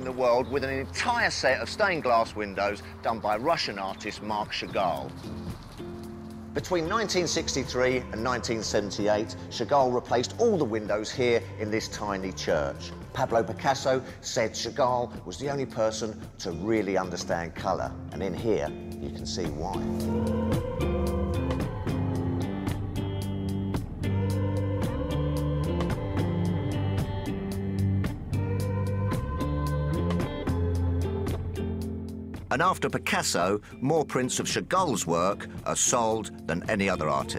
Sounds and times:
Speech: 0.0s - 5.1s, 6.6s - 19.9s, 32.5s - 37.3s
Music: 0.0s - 37.3s.

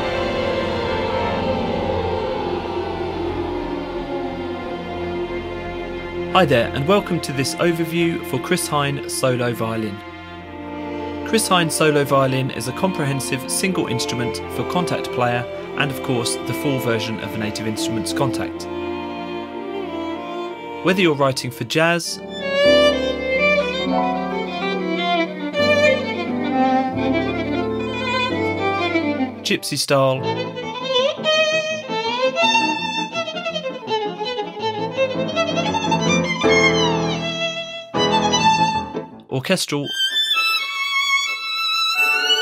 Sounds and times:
Violin, fiddle: 0.0s - 39.1s, 39.8s - 42.4s
Speech: 6.4s - 10.0s, 11.3s - 18.7s, 20.8s - 22.2s, 29.4s - 30.3s, 39.3s - 40.0s.

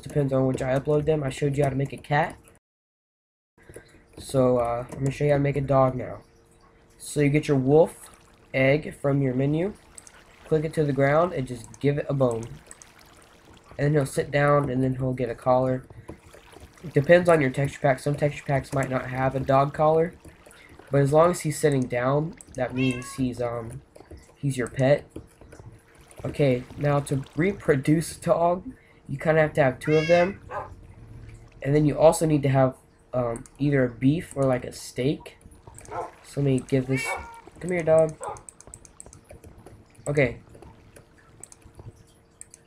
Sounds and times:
Speech: 0.0s - 2.4s, 4.2s - 6.2s, 7.0s - 9.8s, 10.5s - 12.6s, 13.8s - 15.9s, 16.9s - 20.2s, 20.9s - 23.8s, 24.4s - 25.1s, 26.2s - 30.4s, 31.6s - 35.4s, 36.2s - 38.2s, 40.1s - 40.4s.

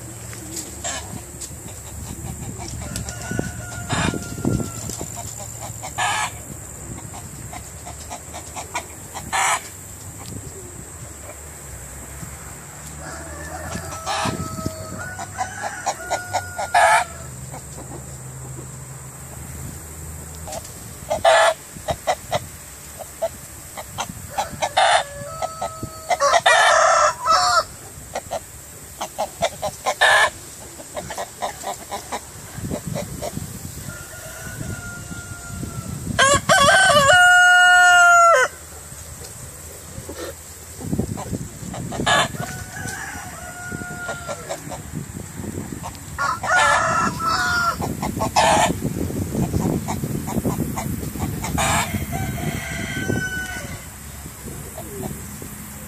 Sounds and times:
Cluck: 0.8s - 3.2s, 7.0s - 10.4s, 16.1s - 18.8s, 20.5s - 25.0s, 28.1s - 33.4s, 39.9s - 42.5s, 47.8s - 51.9s, 54.7s - 55.3s
Crowing, cock-a-doodle-doo: 2.8s - 5.0s, 13.0s - 17.4s, 24.3s - 27.7s, 33.8s - 38.6s, 42.1s - 44.6s, 46.1s - 48.8s, 51.6s - 54.0s.

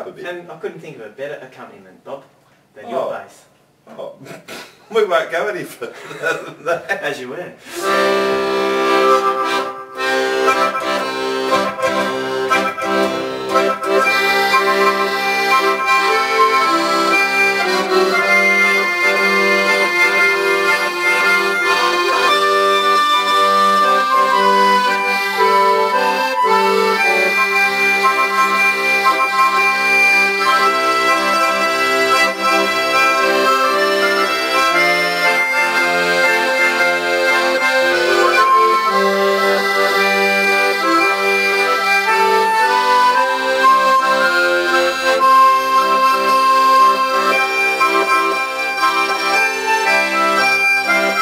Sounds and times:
Music: 7.8s - 51.2s.

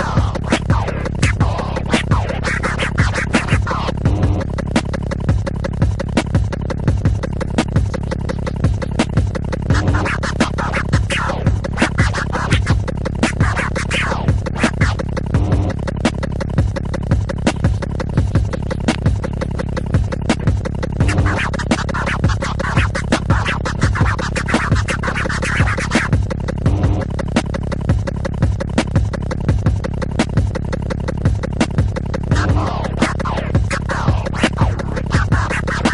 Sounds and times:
Hip hop music: 0.0s - 35.9s
Scratching (performance technique): 0.0s - 35.9s.

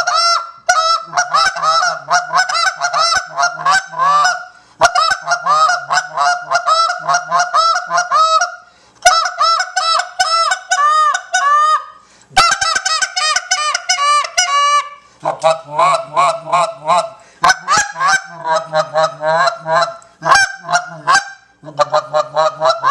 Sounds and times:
Honk: 0.0s - 22.9s.

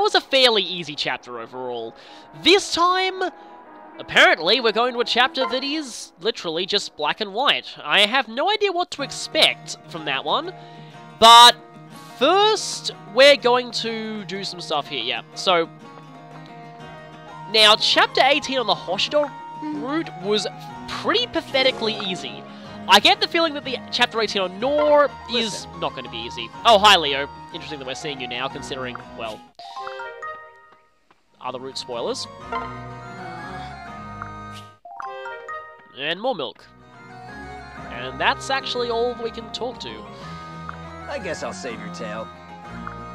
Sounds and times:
Speech: 0.0s - 3.3s, 4.1s - 10.5s, 12.2s - 15.7s, 17.5s - 29.4s, 31.4s - 32.3s, 36.0s - 36.7s, 37.9s - 40.0s, 41.1s - 42.3s
Music: 0.0s - 43.1s.

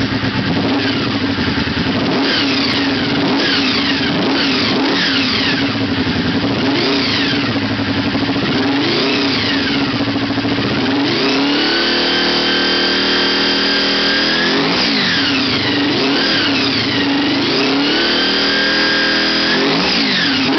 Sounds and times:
Motorcycle: 0.0s - 20.5s.

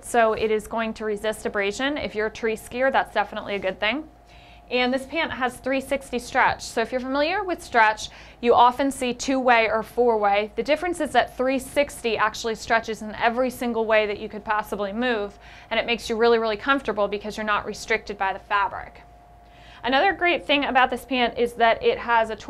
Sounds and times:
Speech: 0.0s - 4.1s, 4.7s - 19.0s, 19.8s - 22.4s.

